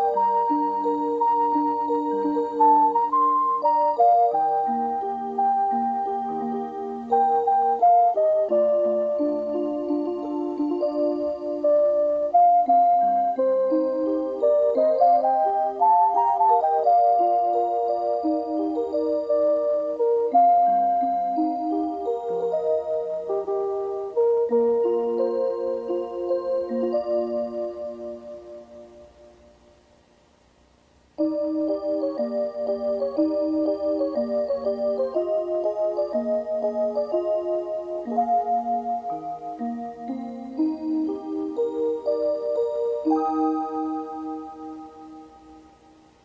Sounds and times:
Music: 0.0s - 30.3s, 31.1s - 46.2s.

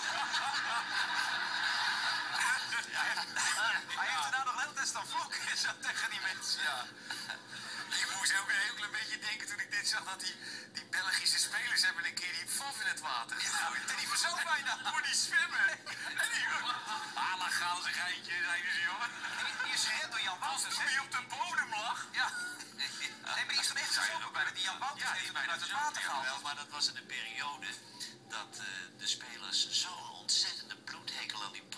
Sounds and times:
Speech: 2.4s - 6.9s, 7.9s - 31.7s.

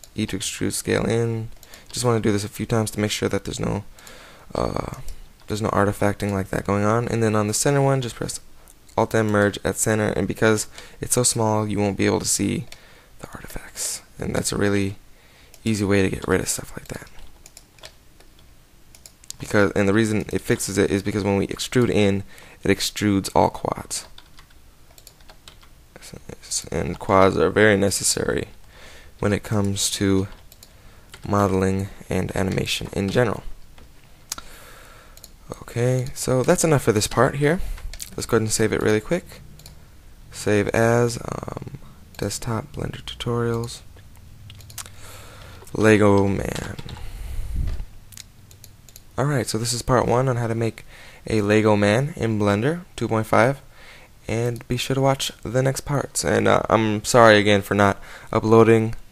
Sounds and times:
Speech: 0.2s - 3.9s, 4.5s - 15.0s, 15.6s - 17.2s, 19.4s - 24.2s, 26.0s - 28.6s, 29.2s - 30.4s, 31.2s - 33.5s, 35.5s - 39.4s, 40.4s - 43.9s, 45.7s - 46.9s, 49.2s - 53.6s, 54.3s - 59.0s
Computer keyboard: 16.7s - 19.4s, 23.9s - 25.8s.

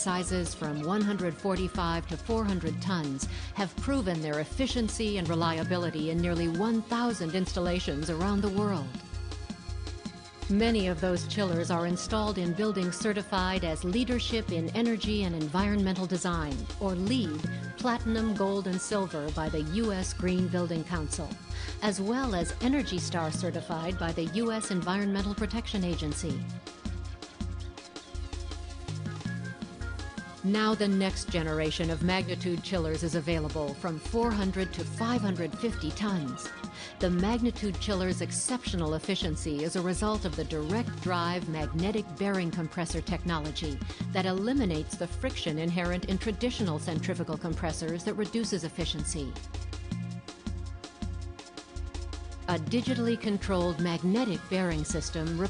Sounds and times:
Speech: 0.0s - 9.0s, 10.5s - 26.5s, 30.5s - 49.4s, 52.5s - 55.4s
Music: 0.0s - 55.4s.

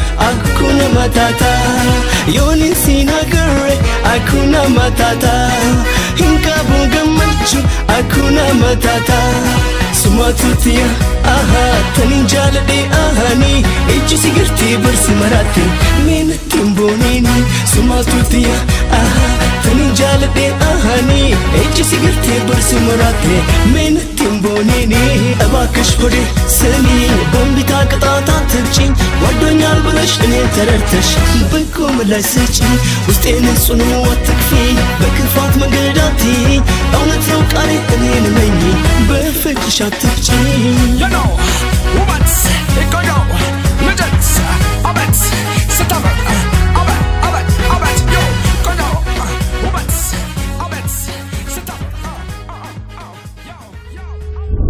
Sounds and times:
Music of Africa: 0.0s - 54.0s
Singing: 0.0s - 54.4s.

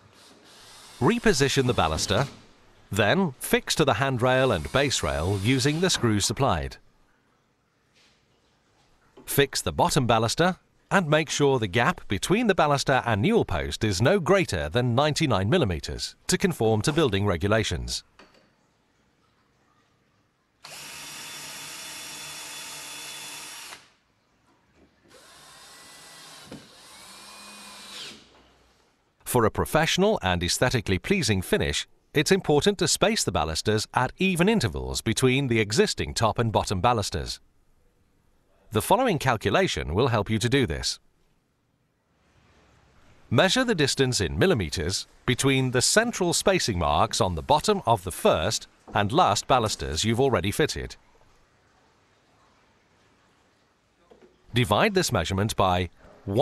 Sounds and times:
Speech: 1.0s - 6.8s, 9.3s - 18.0s, 29.2s - 37.4s, 38.7s - 41.0s, 43.3s - 51.0s, 54.0s - 56.4s.

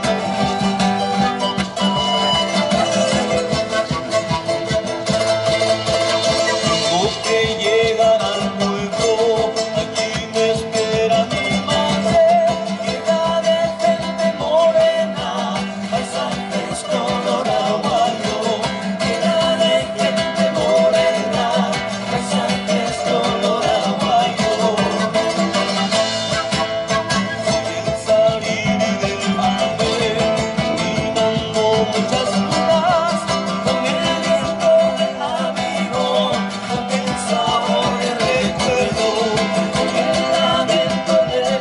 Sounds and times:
Traditional music: 0.0s - 41.6s.

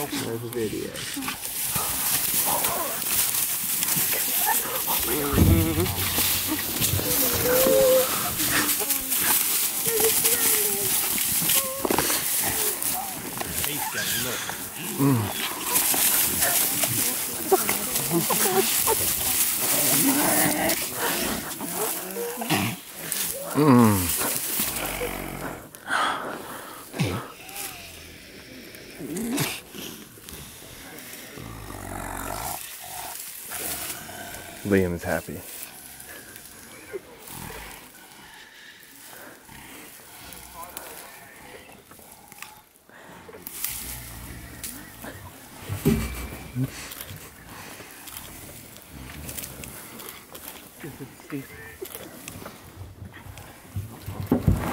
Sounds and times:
Outside, rural or natural: 0.0s - 54.7s
Roaring cats (lions, tigers): 0.9s - 25.8s, 27.0s - 34.7s, 35.6s - 54.7s
Speech: 34.6s - 35.4s.

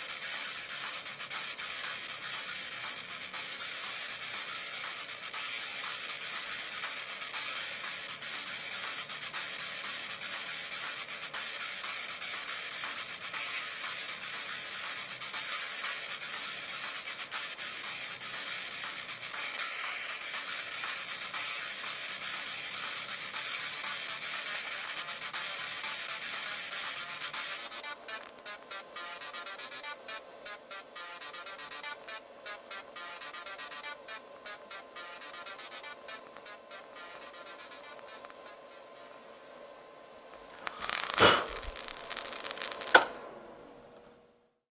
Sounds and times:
Inside, small room: 0.0s - 44.7s.

